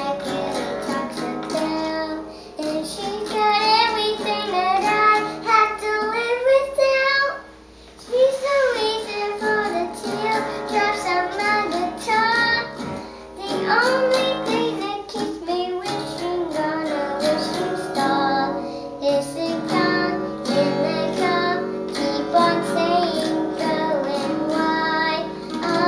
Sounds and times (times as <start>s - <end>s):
Child singing: 0.0s - 7.4s, 8.0s - 25.8s
Guitar: 0.0s - 25.8s.